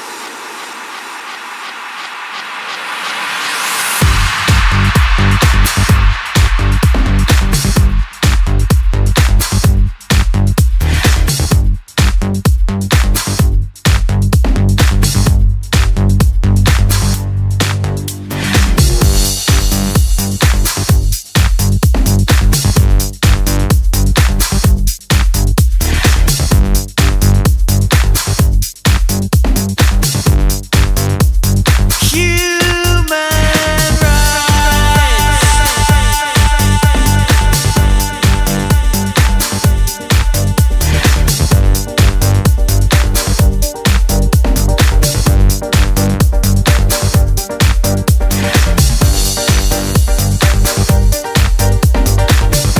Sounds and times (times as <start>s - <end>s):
House music: 0.0s - 52.7s.